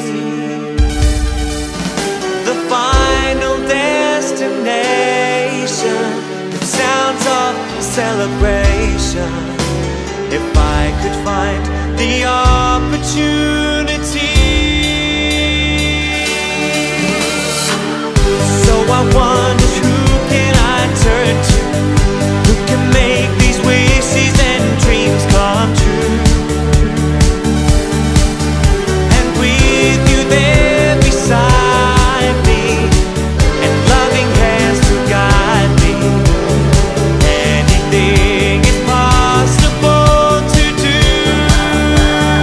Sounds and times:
Music: 0:00.0 - 0:42.4.

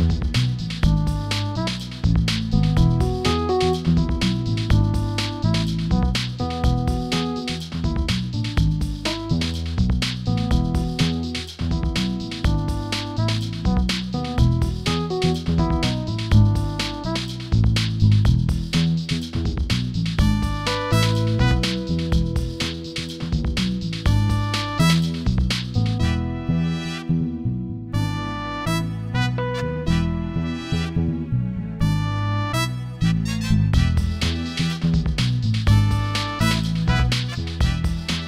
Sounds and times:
Music: 0:00.0 - 0:38.2.

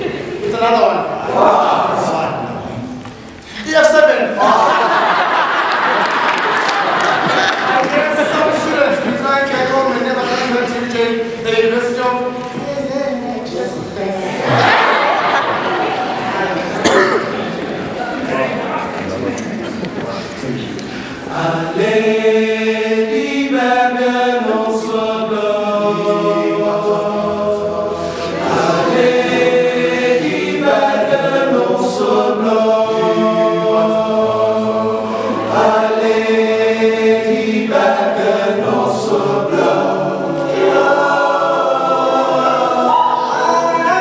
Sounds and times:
A capella: 0:20.9 - 0:44.0.

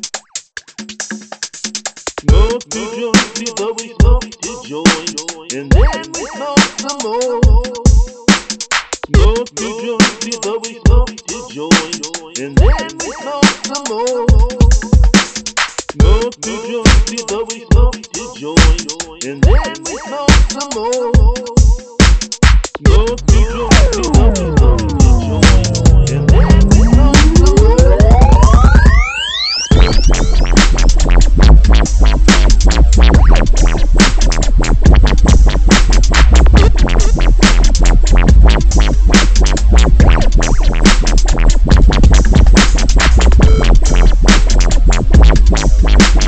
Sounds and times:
Dubstep: 0:02.1 - 0:46.2.

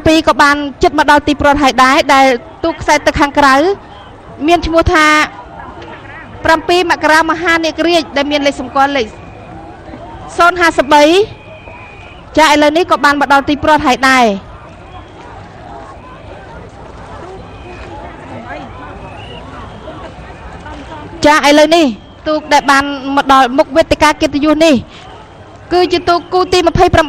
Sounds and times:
Stream: 0:00.0 - 0:27.0.

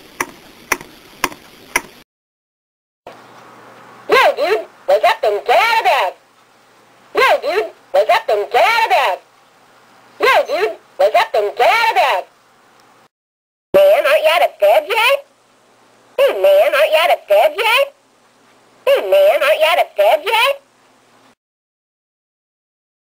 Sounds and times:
Speech: 0:04.1 - 0:06.2, 0:07.2 - 0:09.3, 0:10.2 - 0:12.3, 0:13.8 - 0:15.3, 0:16.2 - 0:18.0, 0:18.8 - 0:20.6.

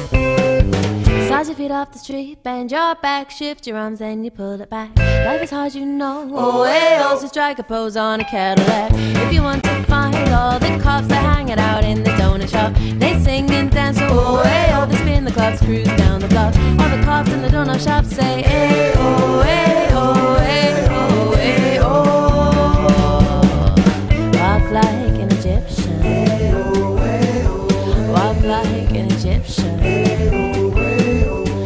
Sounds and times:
Pop music: 0:00.0 - 0:01.6, 0:06.3 - 0:31.6
Musical instrument: 0:14.0 - 0:31.6.

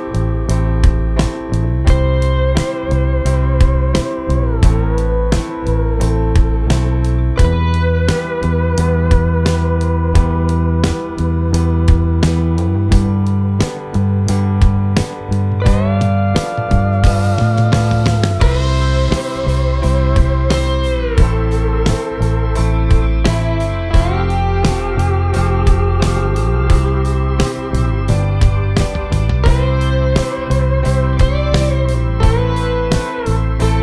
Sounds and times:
Music: 0:00.0 - 0:33.8.

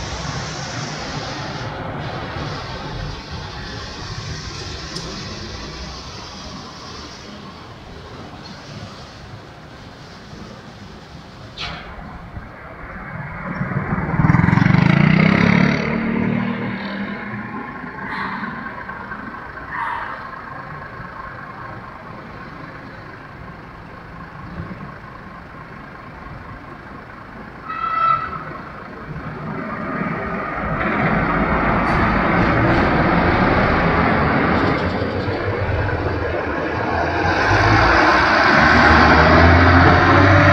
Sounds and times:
Car: 0:00.0 - 0:40.5
Idling: 0:17.6 - 0:36.8.

